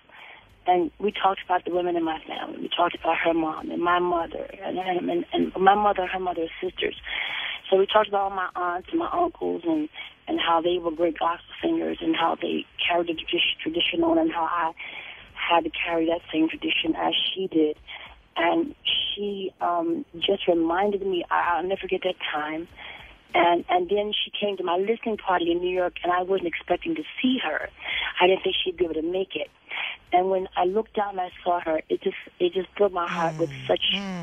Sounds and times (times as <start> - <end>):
Speech: 0.1 - 34.2.